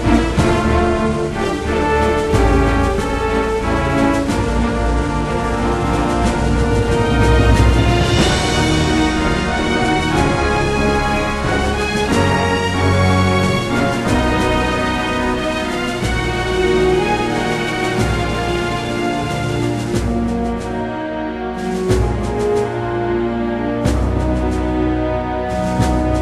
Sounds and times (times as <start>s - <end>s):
Music: 0.0s - 26.2s.